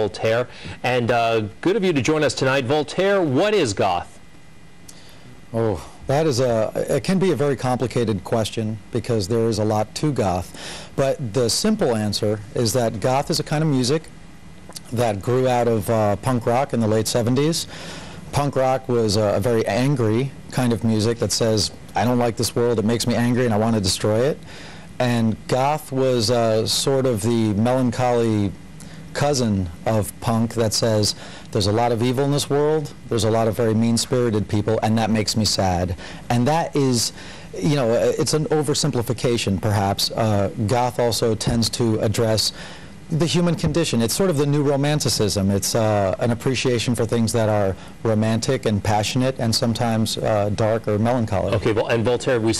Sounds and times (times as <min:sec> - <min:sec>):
Speech: 0:00.0 - 0:04.2, 0:05.5 - 0:14.1, 0:14.8 - 0:17.7, 0:18.4 - 0:24.4, 0:25.0 - 0:28.6, 0:29.2 - 0:42.5, 0:43.1 - 0:52.5.